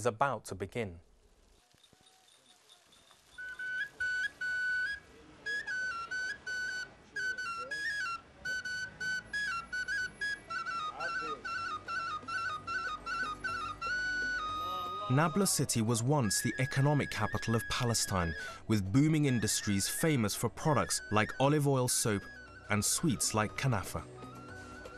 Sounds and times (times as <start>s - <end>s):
Speech: 0.0s - 1.0s, 14.9s - 24.0s
Outside, rural or natural: 1.0s - 5.6s
Music: 3.4s - 24.9s.